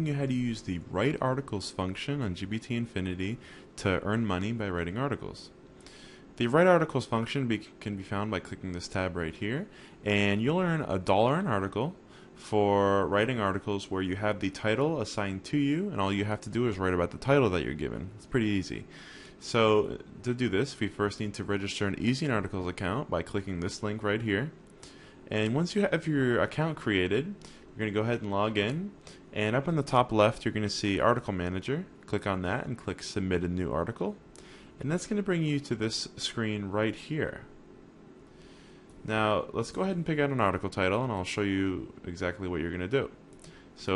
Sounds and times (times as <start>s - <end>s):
Speech: 0.0s - 5.6s, 6.4s - 24.6s, 25.3s - 34.2s, 34.8s - 37.6s, 39.0s - 43.2s.